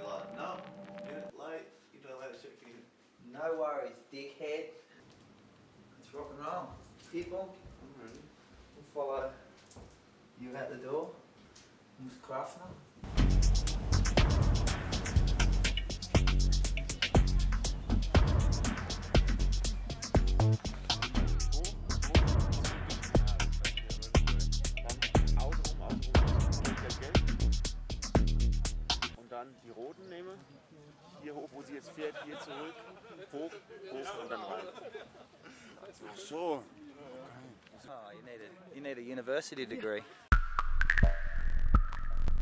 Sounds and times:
Speech: 1.2 - 4.8, 6.0 - 9.5, 10.4 - 11.2, 12.0 - 12.8, 24.8 - 27.2.

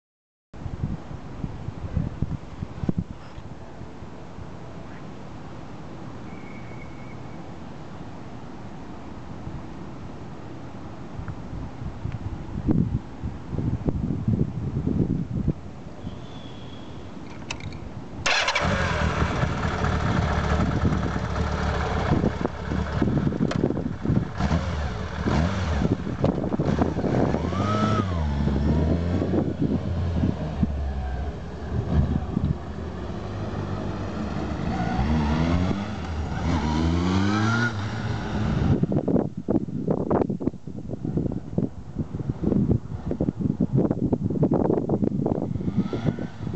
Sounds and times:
Wind: 0.5 - 46.5.

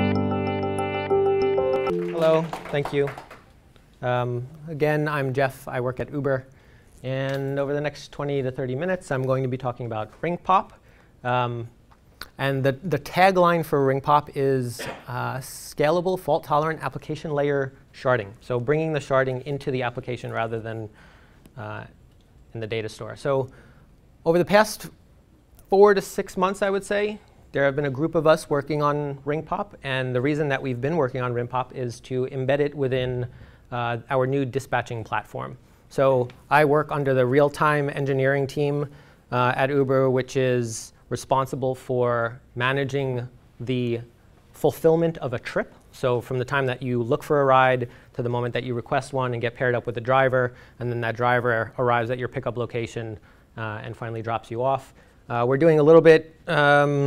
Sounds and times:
Speech: 1.9 - 3.2, 4.0 - 21.0, 21.6 - 23.6, 24.2 - 25.0, 25.7 - 57.0.

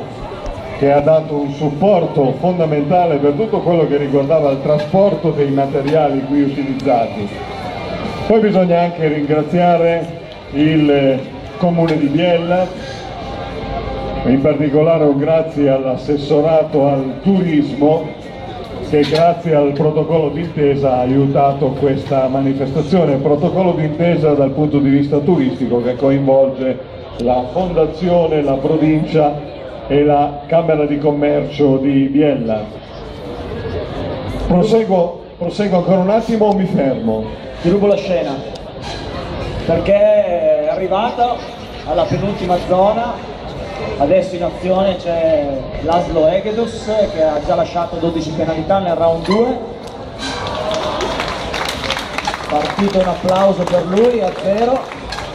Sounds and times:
Speech: 0.0 - 7.4, 8.2 - 13.0, 14.2 - 32.9, 34.4 - 38.6, 39.6 - 49.8, 52.5 - 55.0.

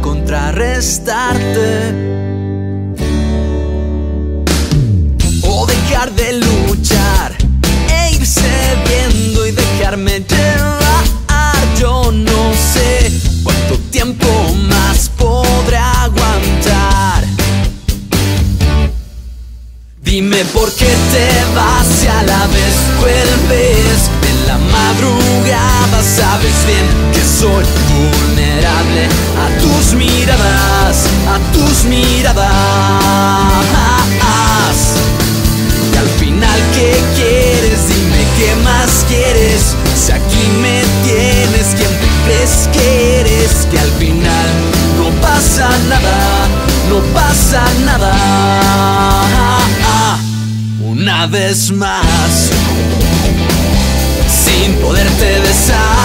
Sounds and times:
Blues: 0.0 - 56.0
Rhythm and blues: 0.0 - 56.0.

